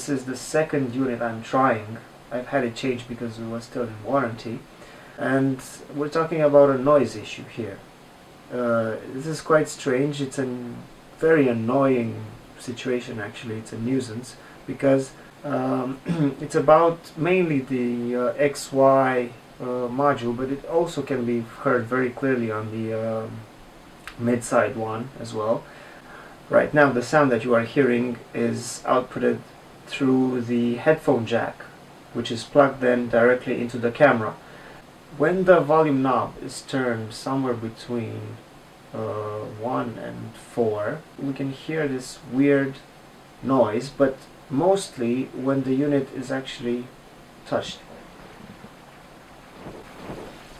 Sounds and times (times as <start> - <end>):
Speech: 0.0 - 7.9, 8.5 - 23.5, 24.1 - 25.7, 26.5 - 34.4, 35.1 - 48.0.